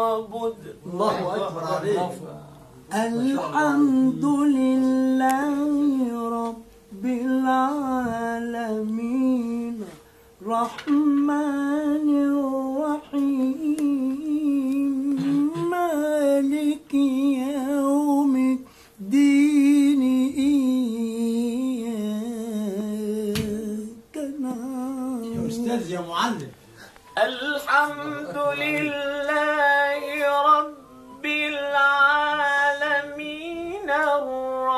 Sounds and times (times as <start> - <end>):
Inside, small room: 0.0 - 34.7.